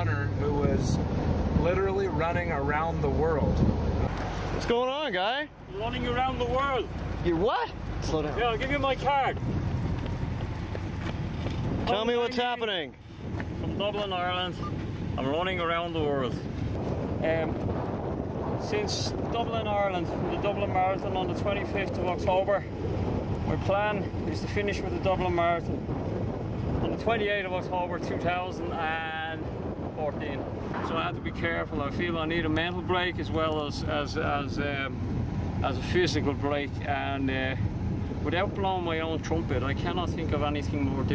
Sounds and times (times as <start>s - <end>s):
Speech: 0.0s - 1.0s, 11.8s - 12.9s, 17.2s - 17.6s, 18.6s - 22.7s, 23.5s - 25.7s, 26.8s - 29.4s, 30.0s - 35.0s, 35.6s - 37.6s, 38.2s - 41.1s
Outside, rural or natural: 0.0s - 41.1s.